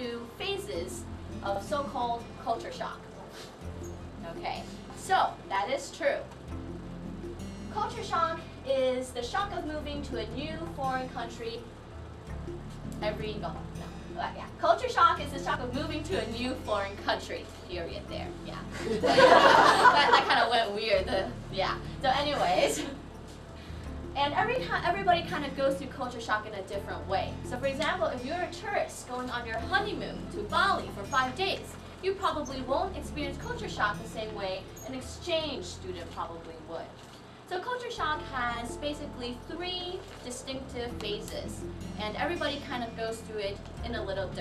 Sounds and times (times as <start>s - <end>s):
Female speech, woman speaking: 0.0s - 3.2s, 4.2s - 6.3s, 7.8s - 11.7s, 13.0s - 18.8s, 19.9s - 23.0s, 24.2s - 44.4s
Music: 0.0s - 44.4s
Narration, monologue: 0.0s - 44.4s.